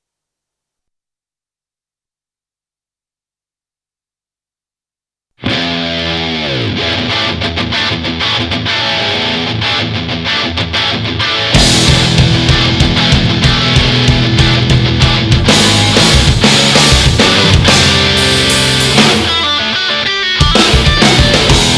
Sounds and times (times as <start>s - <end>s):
Music: 5.4s - 21.7s.